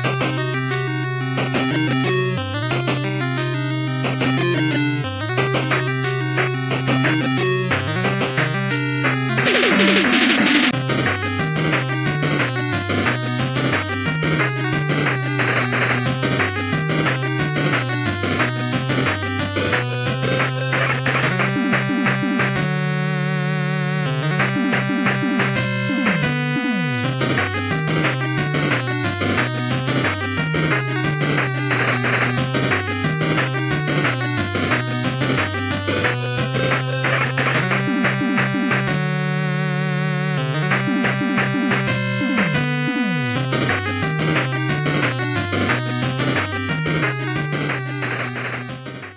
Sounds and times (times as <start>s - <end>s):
Music: 0.0s - 49.1s.